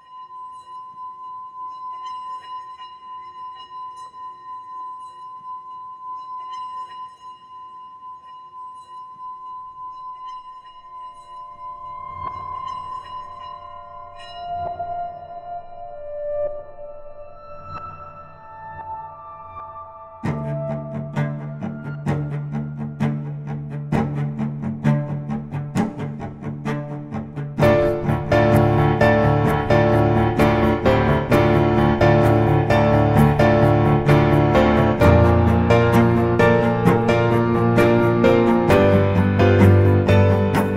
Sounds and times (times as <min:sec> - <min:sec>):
Music: 0:00.0 - 0:40.7.